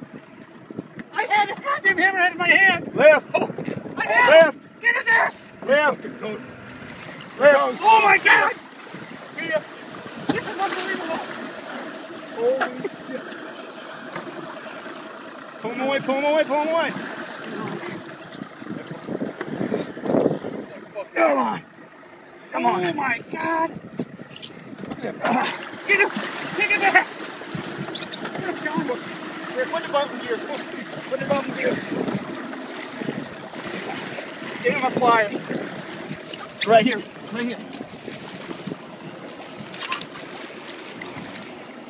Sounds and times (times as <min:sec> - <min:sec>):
Ocean: 0:00.0 - 0:41.9
Speech: 0:15.6 - 0:16.9, 0:25.0 - 0:27.1, 0:29.6 - 0:31.9.